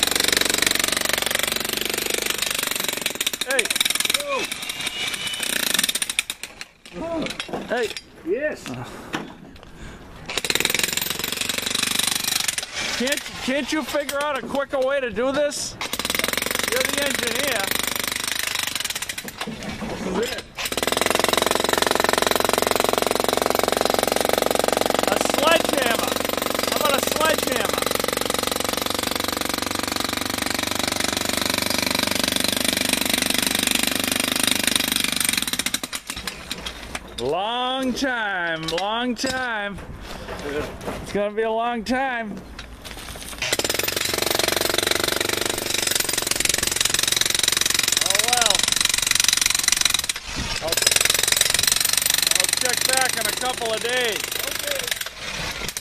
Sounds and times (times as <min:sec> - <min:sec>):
Jackhammer: 0:00.0 - 0:06.7, 0:10.3 - 0:13.4, 0:15.8 - 0:19.4, 0:20.6 - 0:36.3, 0:43.4 - 0:55.8.